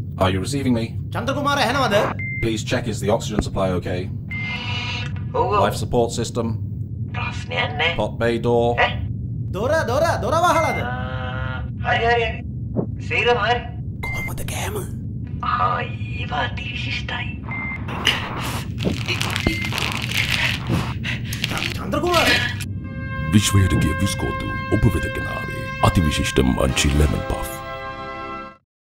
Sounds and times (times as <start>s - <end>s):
Music: 22.9s - 28.6s
Speech: 23.3s - 27.6s.